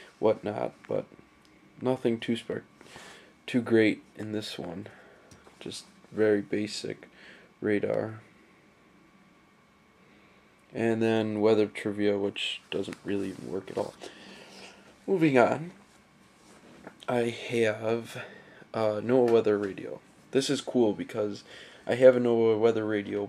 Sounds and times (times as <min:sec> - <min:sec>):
Inside, small room: 0:00.0 - 0:23.2
Speech: 0:00.2 - 0:01.1, 0:01.8 - 0:02.7, 0:03.5 - 0:05.0, 0:05.6 - 0:08.3, 0:10.8 - 0:14.0, 0:15.1 - 0:15.8, 0:17.0 - 0:23.2.